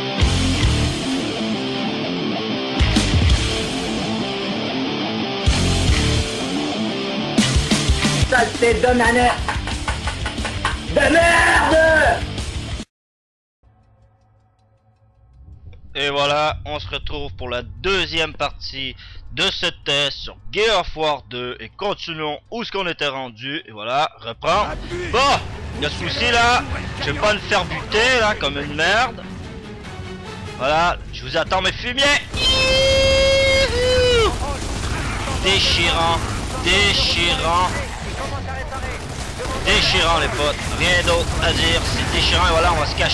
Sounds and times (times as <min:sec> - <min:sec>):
Speech: 0:08.3 - 0:09.4, 0:10.9 - 0:12.2, 0:15.9 - 0:29.3, 0:30.6 - 0:32.3, 0:35.2 - 0:43.1.